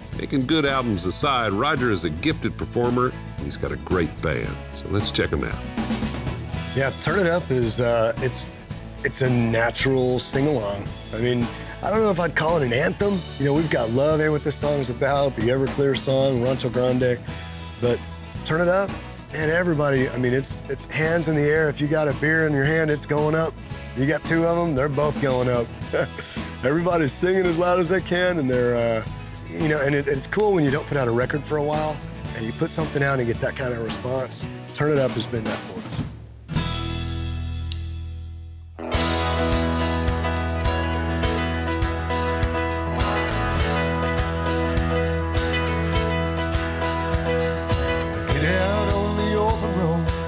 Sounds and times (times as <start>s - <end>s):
Music: 0.0s - 50.2s
Speech: 0.2s - 5.6s, 6.8s - 17.2s, 17.8s - 36.1s.